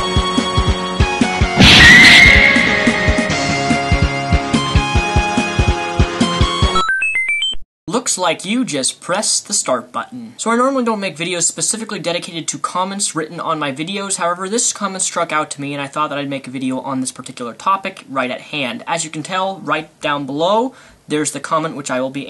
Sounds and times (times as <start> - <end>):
Music: 0.0 - 7.6
Speech: 7.9 - 22.3.